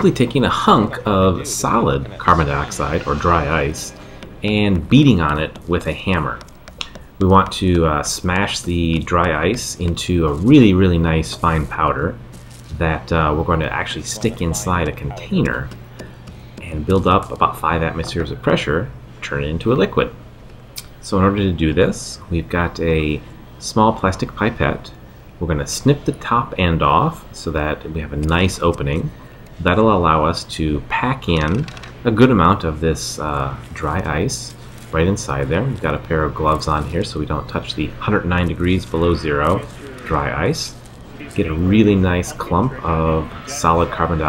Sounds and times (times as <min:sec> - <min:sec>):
Speech: 0:00.0 - 0:06.5, 0:07.2 - 0:15.8, 0:16.6 - 0:20.2, 0:20.8 - 0:44.2.